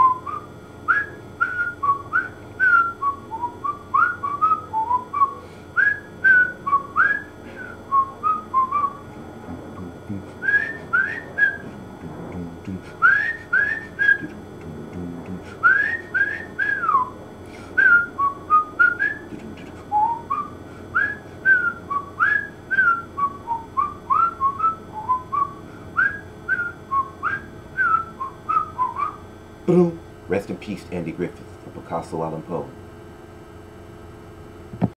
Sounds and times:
Whistling: 0.0 - 9.0, 10.4 - 11.8, 13.0 - 14.4, 15.6 - 17.2, 17.8 - 29.2
Speech: 9.4 - 10.3, 12.0 - 12.8, 14.3 - 15.5, 29.7 - 32.8.

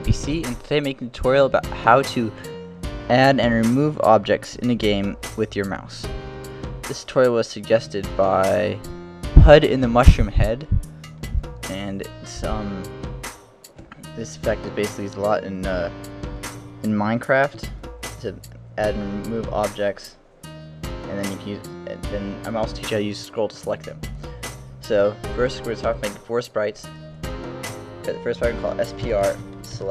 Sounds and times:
Speech: 0.0 - 2.5, 3.1 - 6.1, 6.9 - 10.8, 11.6 - 12.9, 14.0 - 16.0, 16.8 - 20.2, 21.1 - 24.0, 24.8 - 26.9, 28.0 - 29.9
Music: 0.0 - 29.9.

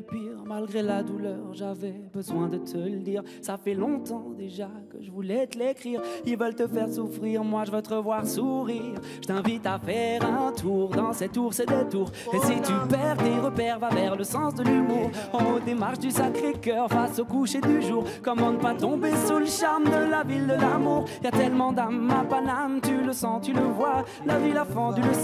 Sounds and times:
Music: 0.0 - 25.2.

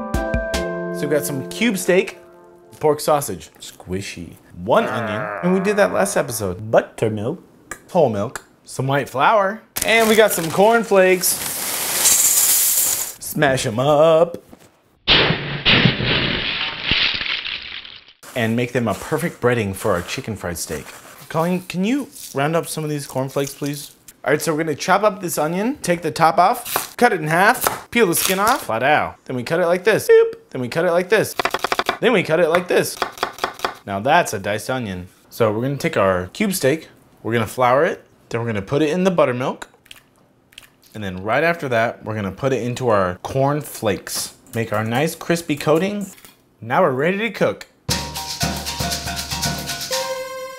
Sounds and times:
Speech: 1.0 - 2.2, 2.8 - 11.4, 13.2 - 14.4, 18.3 - 31.4, 32.0 - 33.0, 33.9 - 39.7, 40.9 - 47.7.

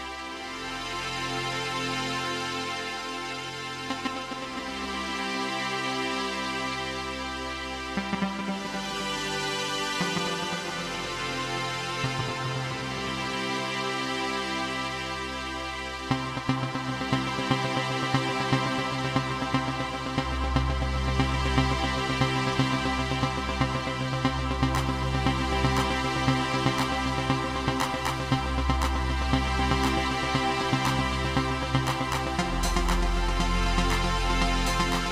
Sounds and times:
Music: 0.0 - 35.1.

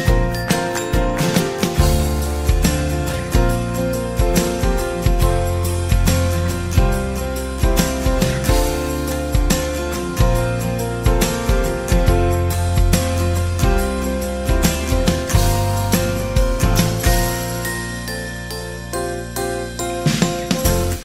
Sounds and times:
Music: 0.0 - 21.0.

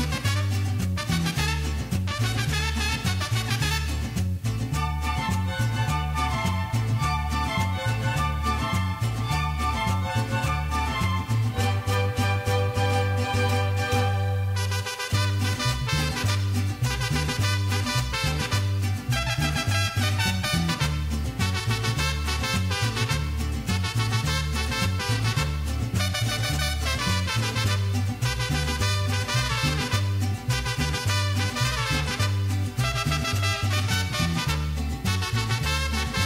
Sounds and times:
Music: 0.0 - 36.2.

